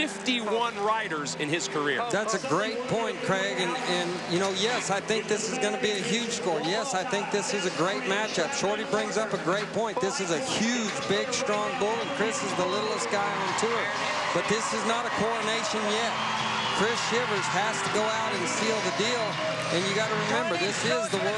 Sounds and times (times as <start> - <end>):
Speech: 0.0 - 16.1, 16.8 - 21.3.